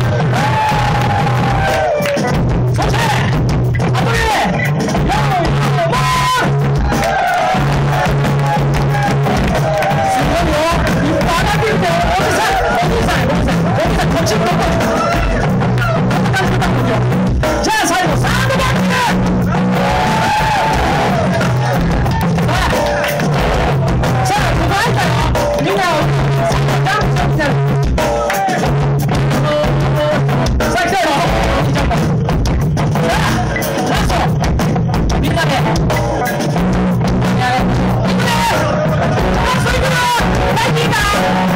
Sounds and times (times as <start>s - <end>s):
Exciting music: 0.0s - 41.5s.